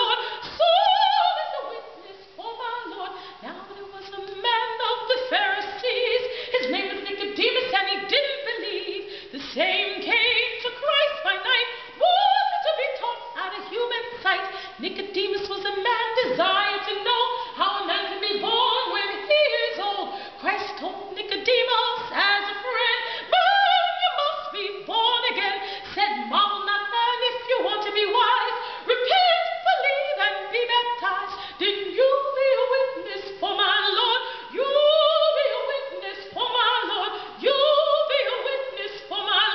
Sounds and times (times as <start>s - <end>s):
Female singing: 0.0s - 39.5s.